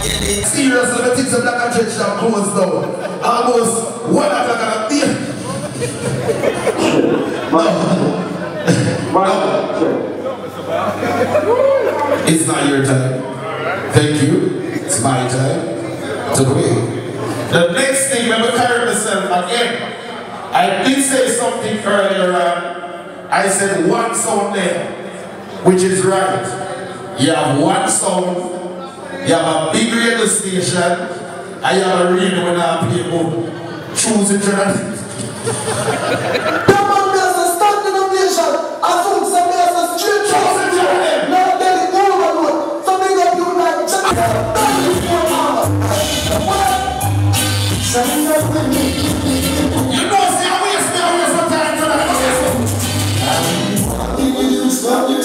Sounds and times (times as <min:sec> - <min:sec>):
Speech: 0:00.0 - 0:06.0, 0:06.8 - 0:11.3, 0:12.2 - 0:25.0, 0:25.6 - 0:35.4, 0:36.6 - 0:47.0, 0:49.9 - 0:52.5.